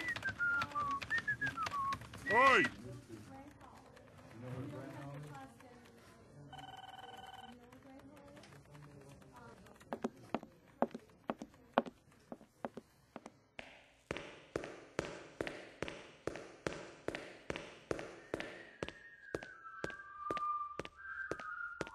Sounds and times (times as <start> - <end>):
Speech: 0.0 - 12.8.